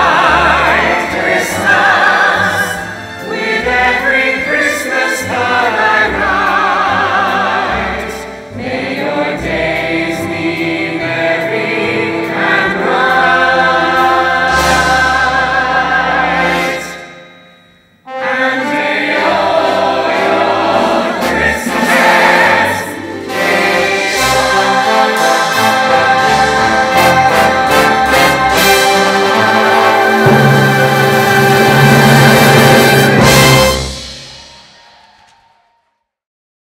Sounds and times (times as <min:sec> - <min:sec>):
Choir: 0:00.0 - 0:17.1, 0:18.1 - 0:35.8.